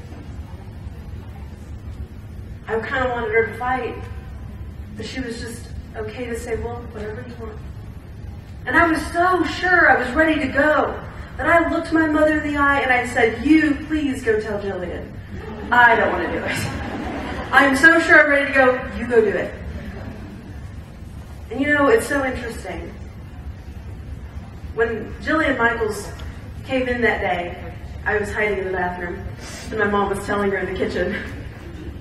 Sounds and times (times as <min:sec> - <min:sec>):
Speech: 0:02.7 - 0:04.2, 0:05.0 - 0:07.6, 0:08.6 - 0:16.7, 0:17.5 - 0:19.6, 0:21.5 - 0:23.0, 0:24.8 - 0:31.3
Laughter: 0:15.4 - 0:17.6, 0:19.6 - 0:20.5, 0:31.1 - 0:32.0.